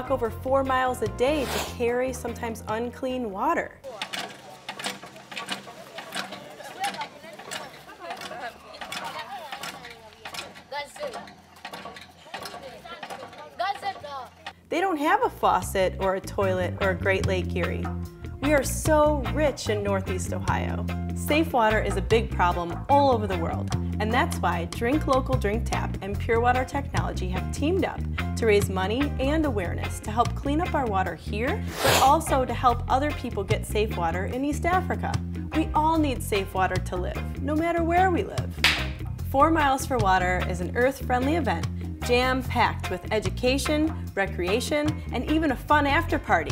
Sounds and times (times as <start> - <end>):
Speech: 0.0 - 4.1, 12.4 - 38.5, 39.3 - 46.5.